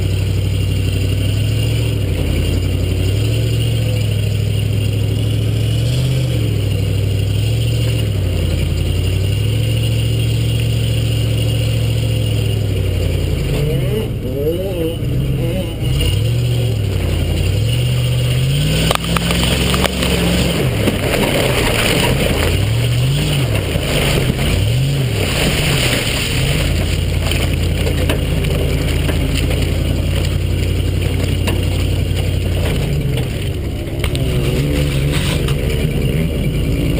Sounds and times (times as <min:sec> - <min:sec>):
Tire squeal: 0:00.0 - 0:36.9.